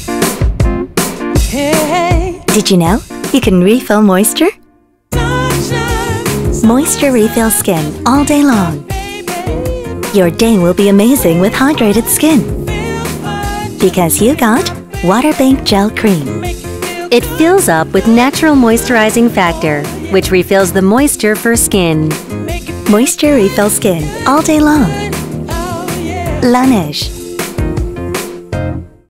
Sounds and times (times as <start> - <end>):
Music: 0.0 - 29.0
Speech: 2.5 - 4.6, 6.6 - 8.8, 10.1 - 12.5, 13.8 - 16.4, 17.1 - 22.2, 22.9 - 25.0, 26.3 - 27.1.